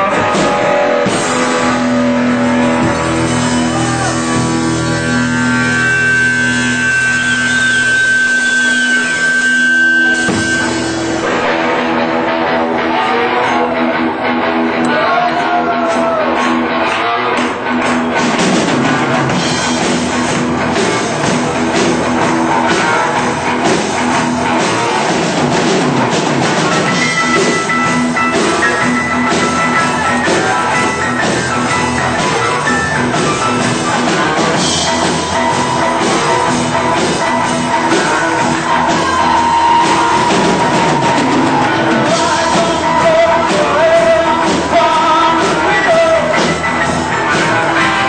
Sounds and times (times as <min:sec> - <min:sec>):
Blues: 0:00.0 - 0:48.0.